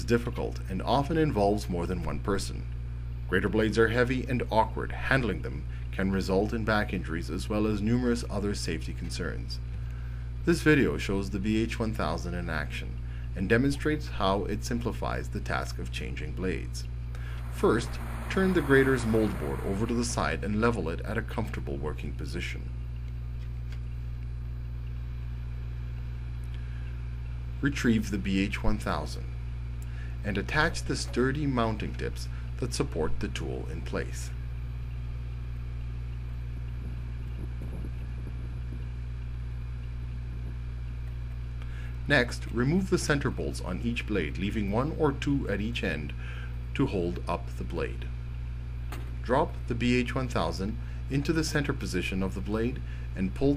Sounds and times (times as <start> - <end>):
Speech: 0.0 - 2.7, 3.3 - 9.6, 10.4 - 16.9, 17.6 - 22.7, 27.6 - 29.4, 30.2 - 34.4, 42.1 - 46.2, 46.8 - 48.1, 49.2 - 53.5.